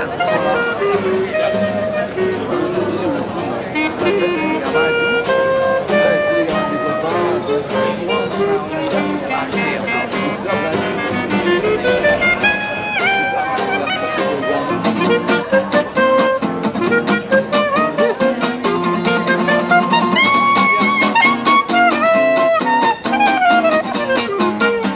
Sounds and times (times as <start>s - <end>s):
Music: 0.0s - 24.9s
Speech: 0.0s - 24.9s.